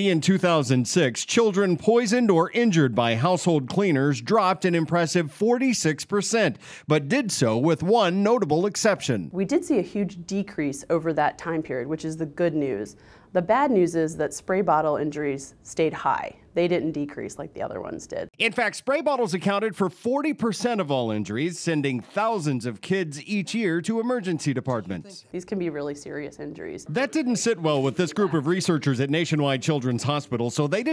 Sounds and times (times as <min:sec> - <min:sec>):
Speech: 0:00.0 - 0:30.9.